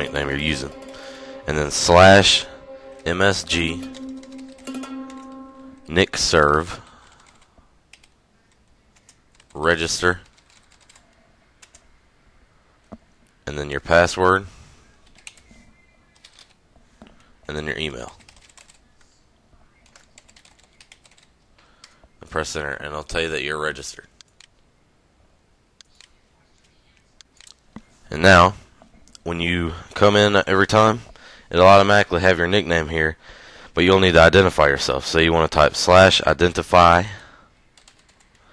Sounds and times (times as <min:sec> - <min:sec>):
Speech: 0:00.0 - 0:04.0, 0:05.9 - 0:06.8, 0:09.5 - 0:10.3, 0:13.4 - 0:14.5, 0:17.5 - 0:18.2, 0:22.2 - 0:24.2, 0:28.0 - 0:28.6, 0:29.2 - 0:33.2, 0:33.8 - 0:37.3
Computer keyboard: 0:07.2 - 0:09.6, 0:10.2 - 0:11.9, 0:15.0 - 0:15.5, 0:16.2 - 0:16.6, 0:18.1 - 0:18.8, 0:19.8 - 0:21.3, 0:37.8 - 0:38.5.